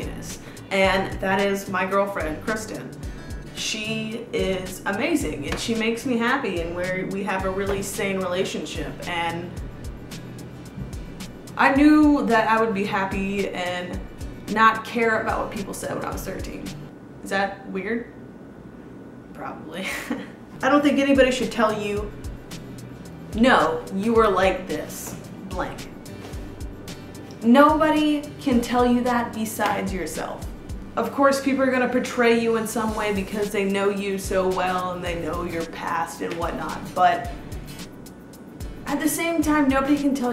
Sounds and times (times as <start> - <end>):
Speech: 0.0 - 3.0, 3.6 - 9.6, 11.6 - 18.2, 19.4 - 22.1, 23.4 - 25.9, 27.4 - 37.3, 38.9 - 40.3
Music: 0.0 - 17.0, 20.6 - 40.3
Inside, small room: 0.0 - 40.3.